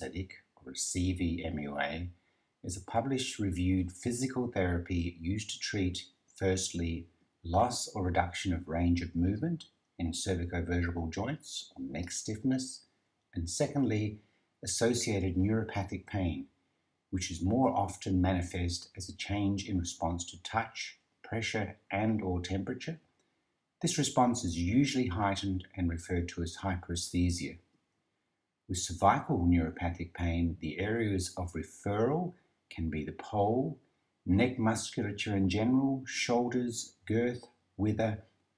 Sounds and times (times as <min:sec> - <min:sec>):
Speech: 0:00.0 - 0:16.5, 0:17.1 - 0:23.0, 0:23.8 - 0:27.6, 0:28.7 - 0:38.2.